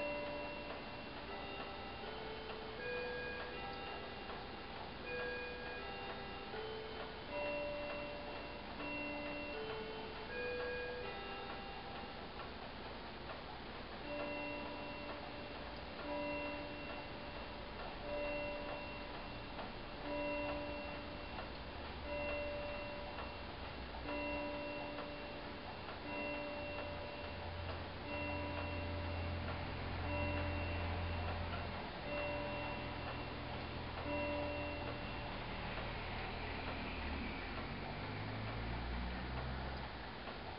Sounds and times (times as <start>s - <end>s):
Tick-tock: 0.0s - 40.5s.